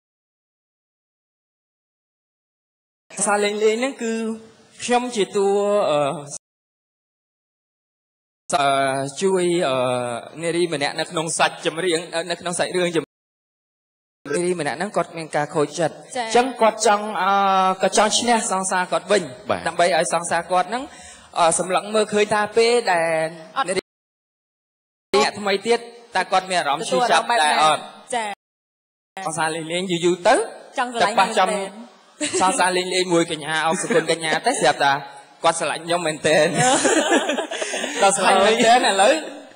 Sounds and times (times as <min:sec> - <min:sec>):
Speech: 0:03.1 - 0:06.4, 0:08.5 - 0:13.1, 0:14.3 - 0:20.8, 0:21.4 - 0:23.8, 0:25.2 - 0:28.4, 0:29.2 - 0:36.8, 0:37.9 - 0:39.5.